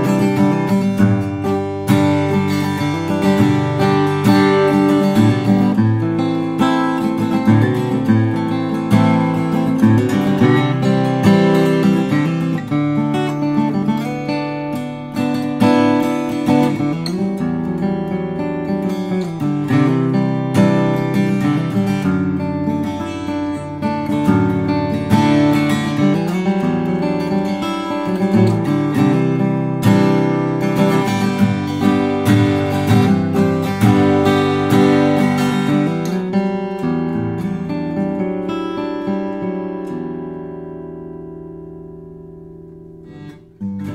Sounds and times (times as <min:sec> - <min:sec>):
Acoustic guitar: 0:00.0 - 0:43.9.